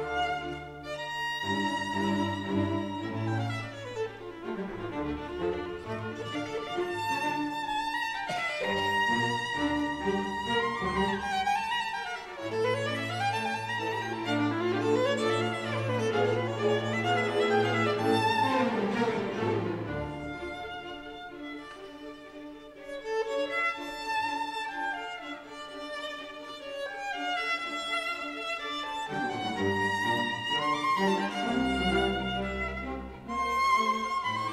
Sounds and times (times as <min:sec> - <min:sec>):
Violin, fiddle: 0:00.0 - 0:34.5.